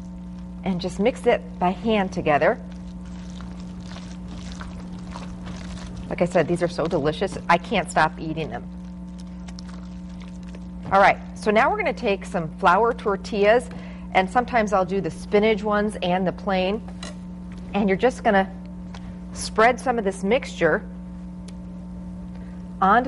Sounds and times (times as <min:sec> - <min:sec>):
Speech: 0:00.6 - 0:02.6, 0:06.1 - 0:08.6, 0:10.9 - 0:16.8, 0:17.7 - 0:18.6, 0:19.4 - 0:20.9, 0:22.8 - 0:23.0.